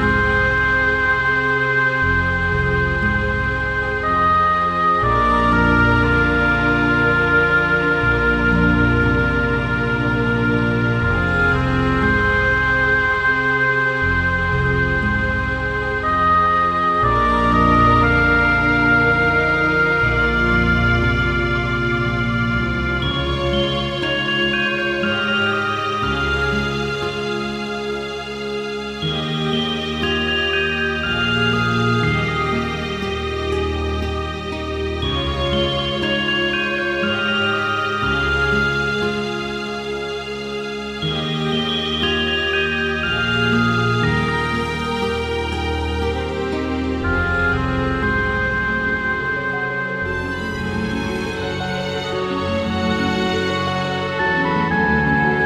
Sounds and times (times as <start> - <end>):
Music: 0.0 - 55.4.